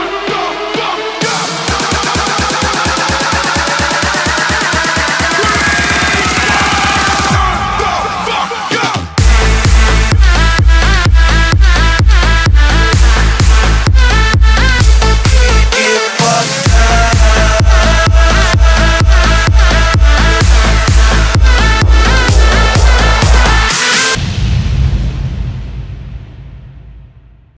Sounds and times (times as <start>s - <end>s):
Music: 0.0s - 27.5s.